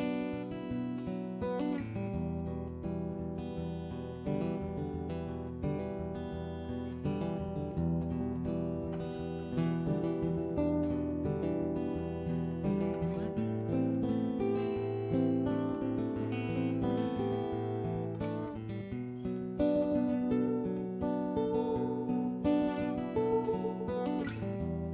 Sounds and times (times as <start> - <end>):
Music: 0.0 - 24.9.